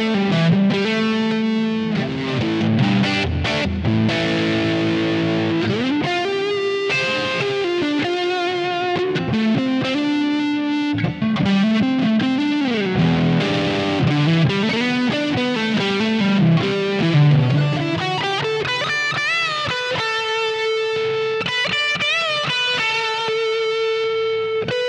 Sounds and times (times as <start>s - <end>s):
Music: 0.0s - 24.8s.